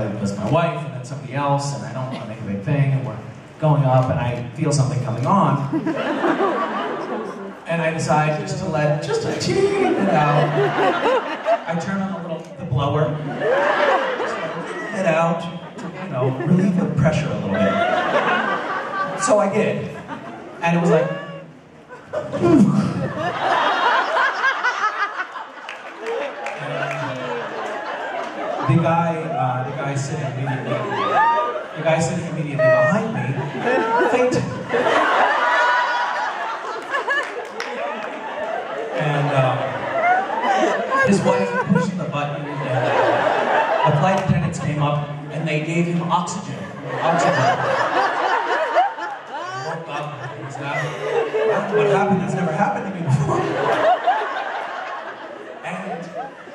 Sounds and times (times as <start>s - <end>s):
Male speech, man speaking: 0.0s - 5.7s, 7.6s - 10.7s, 11.6s - 13.2s, 14.3s - 18.0s, 19.1s - 20.0s, 20.6s - 21.3s, 26.6s - 27.4s, 28.6s - 31.1s, 31.8s - 34.7s, 39.0s - 39.8s, 41.0s - 43.2s, 43.8s - 47.8s, 49.5s - 53.7s, 55.6s - 56.3s.